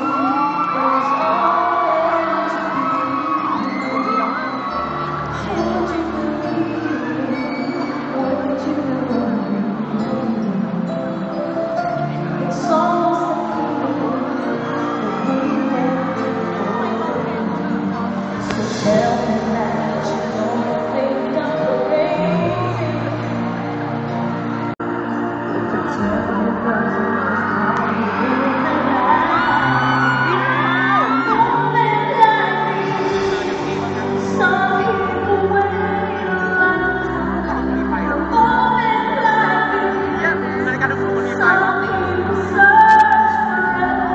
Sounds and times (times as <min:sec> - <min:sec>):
Music: 0:00.0 - 0:44.1.